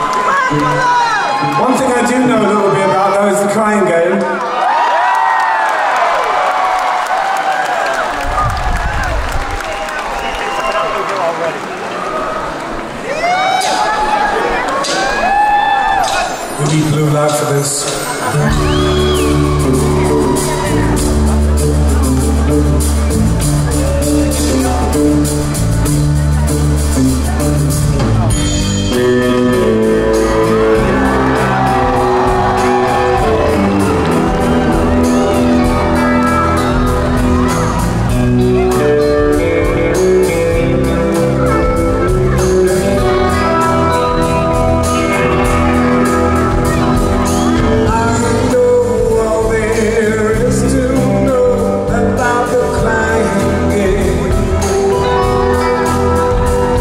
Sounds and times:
Speech: 0.4s - 4.4s, 16.6s - 18.1s.

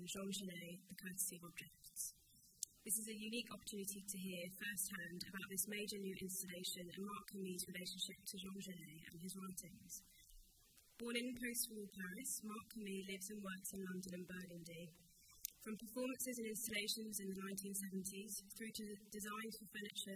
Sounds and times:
Speech: 0.0s - 10.1s, 11.0s - 20.1s.

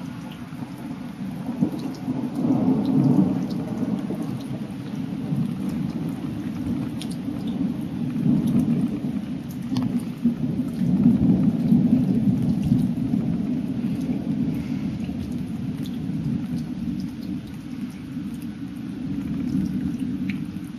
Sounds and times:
Thunder: 0.0s - 17.6s
Raindrop: 0.0s - 20.7s.

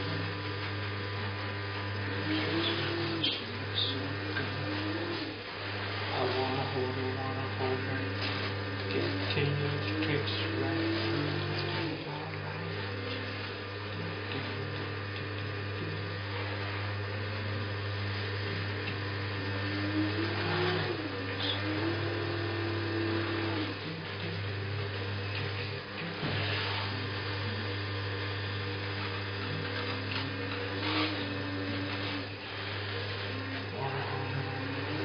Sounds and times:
Male singing: 8.9s - 13.2s, 33.7s - 35.0s.

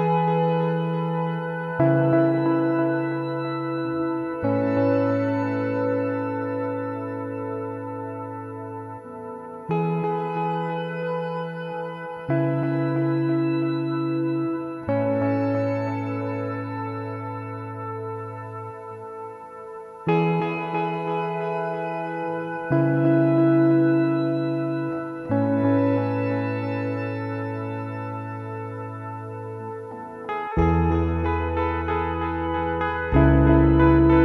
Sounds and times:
Ambient music: 0.0s - 34.2s
New-age music: 0.0s - 34.2s.

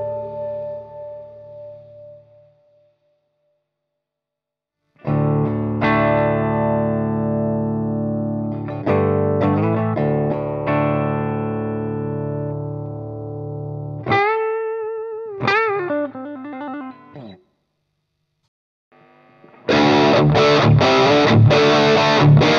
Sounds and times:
Distortion: 0.0s - 3.4s, 4.8s - 22.5s
Music: 0.0s - 3.4s, 4.9s - 17.4s, 19.5s - 22.5s.

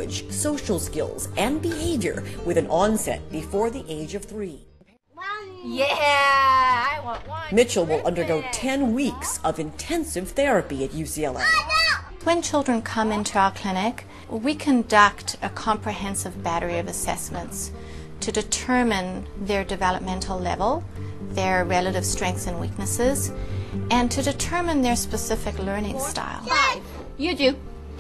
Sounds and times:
Music: 0.0s - 28.0s
Child speech, kid speaking: 5.1s - 8.4s, 11.4s - 12.1s, 25.9s - 26.9s.

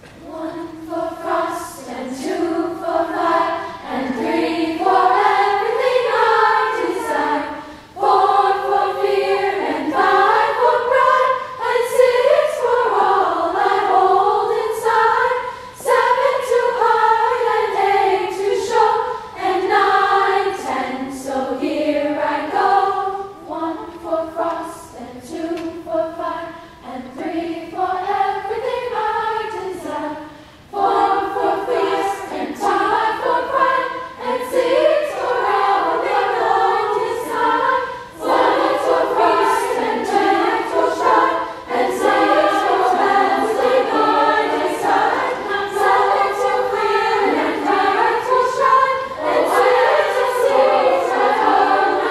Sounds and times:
Choir: 0.0s - 52.1s.

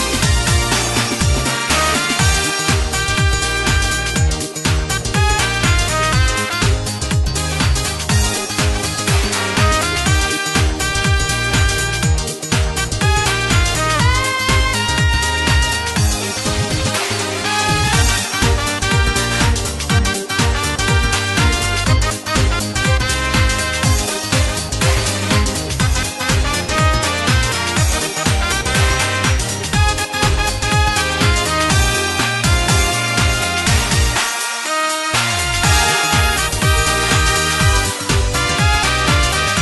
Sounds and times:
Exciting music: 0.0s - 39.6s.

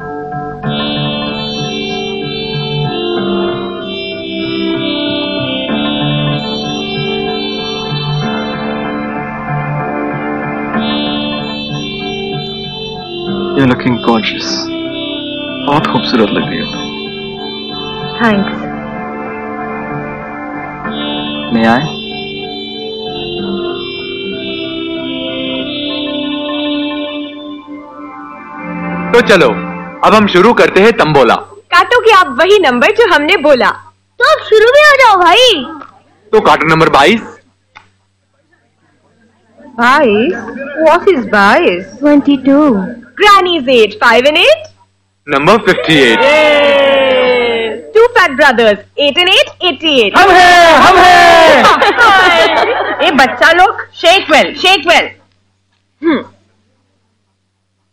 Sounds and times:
Music: 0.0s - 32.0s, 49.5s - 53.1s.

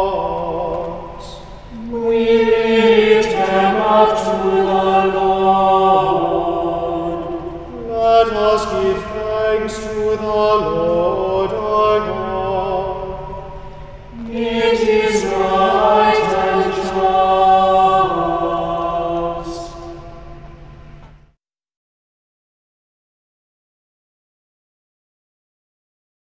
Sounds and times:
Mantra: 0.0s - 20.3s.

